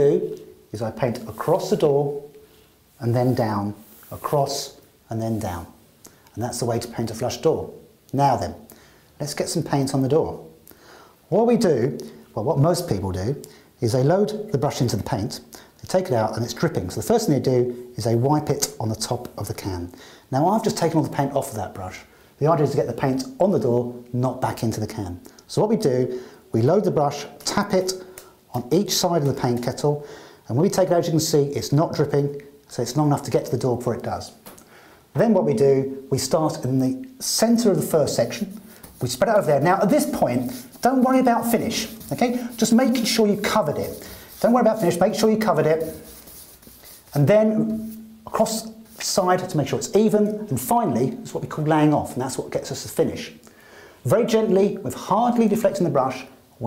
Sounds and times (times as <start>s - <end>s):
Speech: 0.0s - 2.4s, 3.0s - 10.6s, 11.3s - 34.4s, 35.1s - 46.2s, 47.1s - 53.4s, 54.0s - 56.6s.